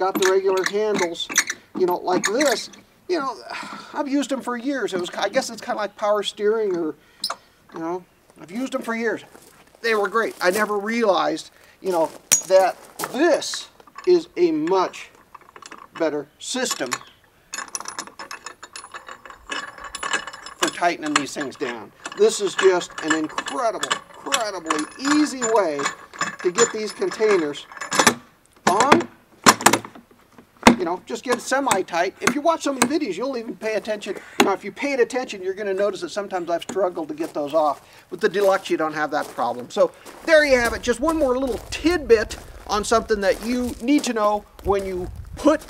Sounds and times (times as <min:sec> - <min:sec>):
Speech: 0:00.0 - 0:07.0, 0:07.8 - 0:15.1, 0:16.0 - 0:17.0, 0:20.6 - 0:27.7, 0:28.7 - 0:29.1, 0:30.8 - 0:45.6
Outside, urban or manmade: 0:00.0 - 0:45.6.